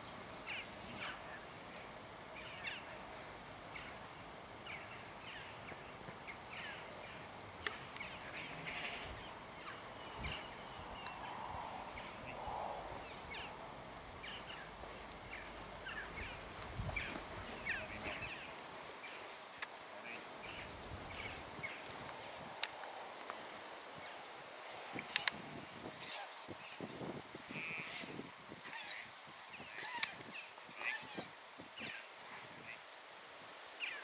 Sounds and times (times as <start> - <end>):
Speech: 17.4 - 18.5.